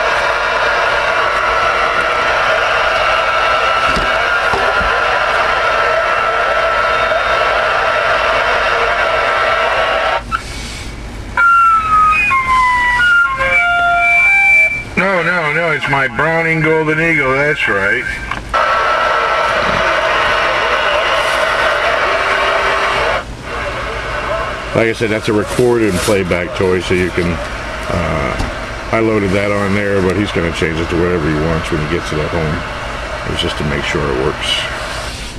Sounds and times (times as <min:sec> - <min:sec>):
Radio: 0:00.0 - 0:10.5, 0:15.0 - 0:35.2
Speech: 0:15.0 - 0:18.2, 0:24.7 - 0:34.8.